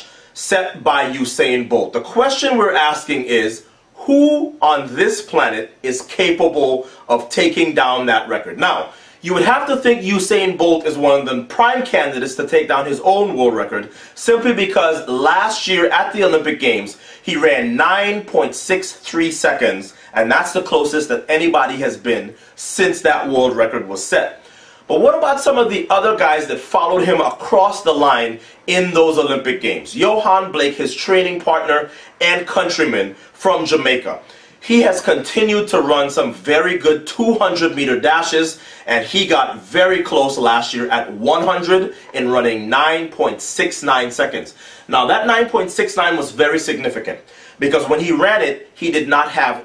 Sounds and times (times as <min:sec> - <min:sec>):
Speech: 0:00.0 - 0:49.6.